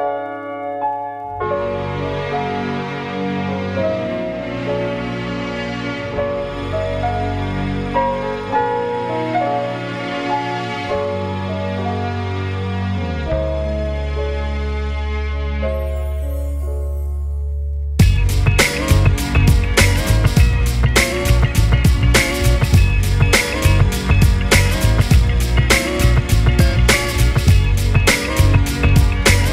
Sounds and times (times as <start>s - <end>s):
Music: 0.0s - 29.5s.